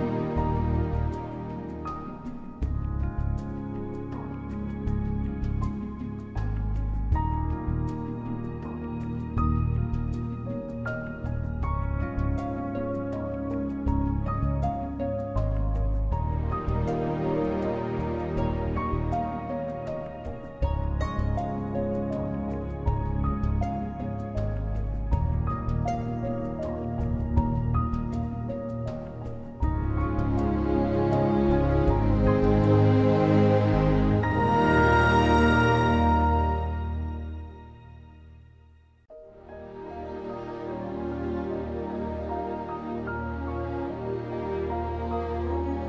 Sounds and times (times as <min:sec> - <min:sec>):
Music: 0:00.0 - 0:45.8.